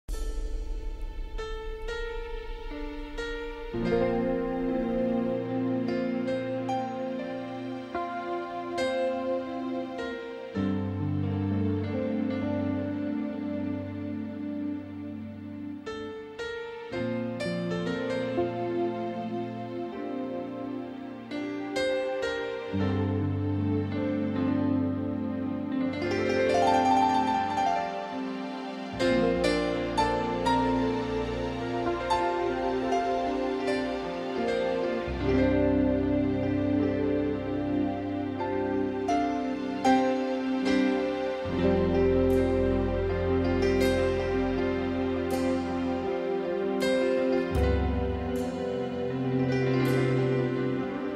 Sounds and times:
Music: 0:00.0 - 0:51.1.

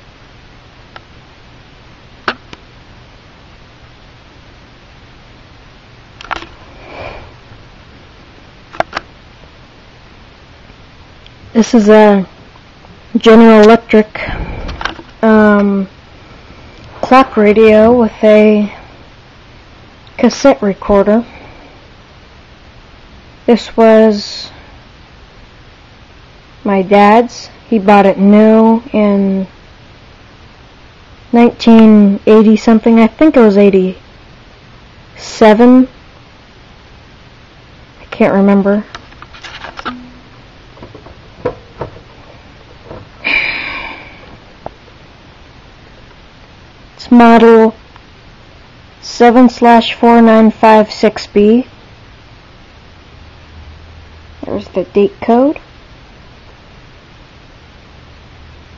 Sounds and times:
Speech: 0:11.6 - 0:12.3, 0:13.1 - 0:14.4, 0:15.2 - 0:15.9, 0:17.0 - 0:18.8, 0:20.2 - 0:21.3, 0:23.5 - 0:24.6, 0:26.6 - 0:29.6, 0:31.3 - 0:34.0, 0:35.2 - 0:35.9, 0:38.0 - 0:38.9, 0:47.0 - 0:47.8, 0:49.0 - 0:51.7, 0:54.4 - 0:55.6.

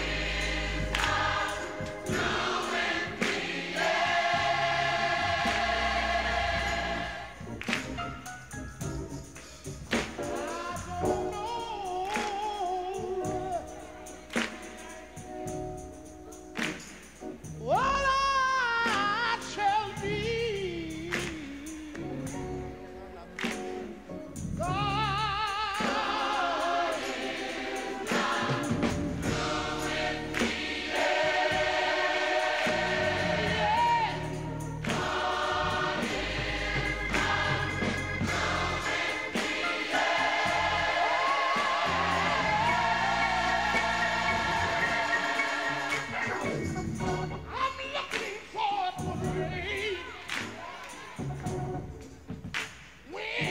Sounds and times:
Choir: 0:00.0 - 0:08.0, 0:09.9 - 0:15.6, 0:24.6 - 0:51.6, 0:53.0 - 0:53.5.

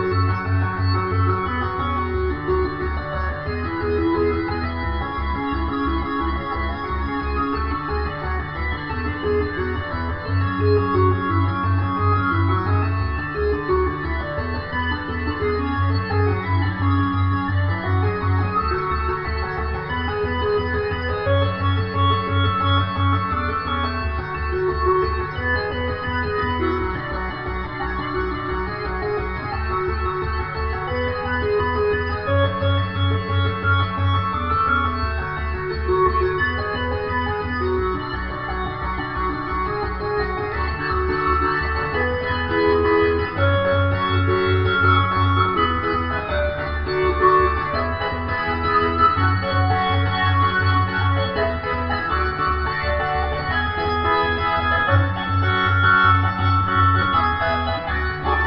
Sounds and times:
Music: 0:00.0 - 0:58.4.

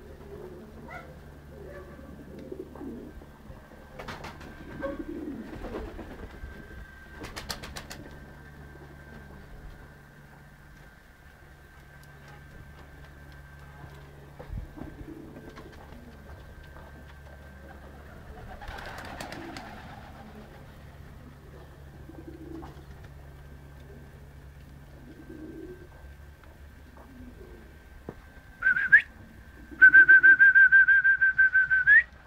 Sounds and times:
Pigeon, dove: 0:00.0 - 0:03.3, 0:03.9 - 0:09.2, 0:14.6 - 0:26.2
Outside, urban or manmade: 0:00.0 - 0:32.2.

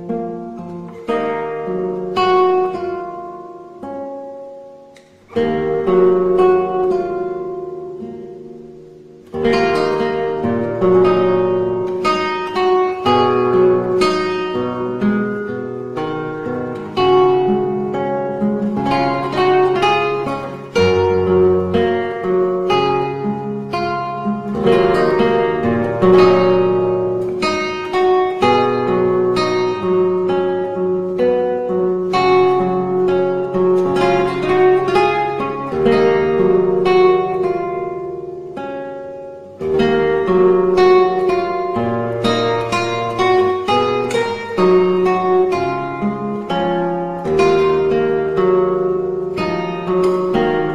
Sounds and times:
Acoustic guitar: 0:00.0 - 0:50.7.

